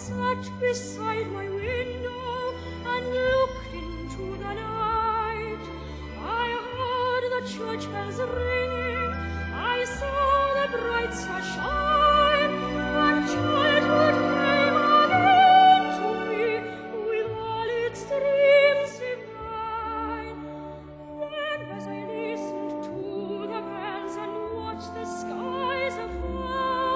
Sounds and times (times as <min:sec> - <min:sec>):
Music: 0:00.0 - 0:26.9.